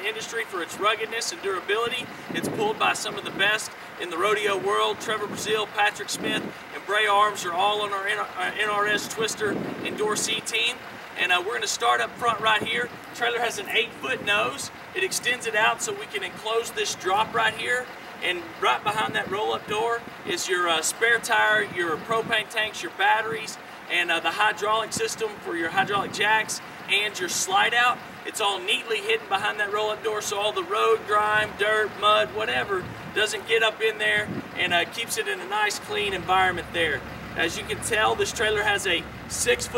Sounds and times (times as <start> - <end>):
Speech: 0.0 - 39.7.